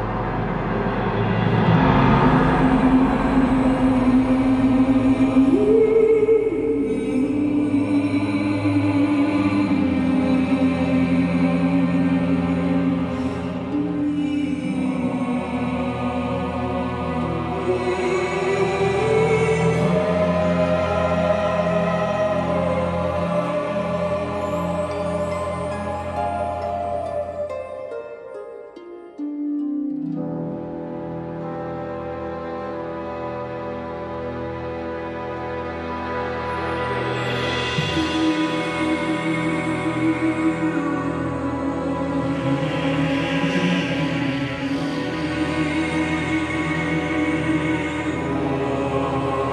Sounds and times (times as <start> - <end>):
Music: 0.0 - 49.5.